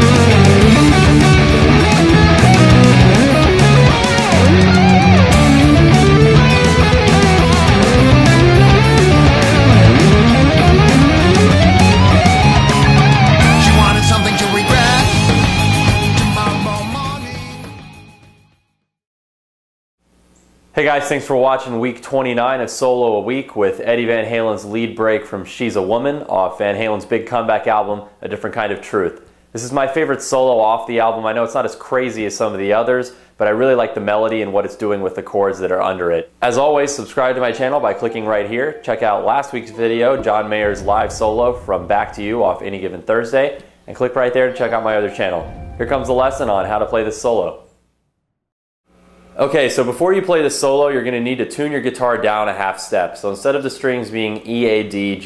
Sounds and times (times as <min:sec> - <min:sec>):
Strum: 0:00.0 - 0:16.7, 0:39.6 - 0:47.9
Electric guitar: 0:00.0 - 0:17.9.